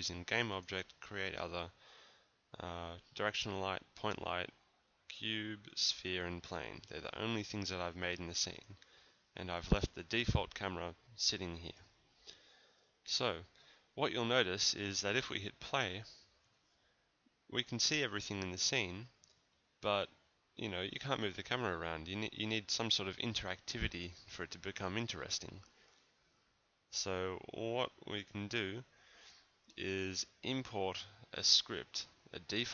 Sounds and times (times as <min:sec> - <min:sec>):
Speech: 0:00.0 - 0:01.8, 0:02.5 - 0:08.8, 0:09.4 - 0:11.9, 0:13.1 - 0:16.3, 0:17.5 - 0:19.2, 0:19.8 - 0:25.7, 0:26.9 - 0:28.9, 0:29.7 - 0:32.7.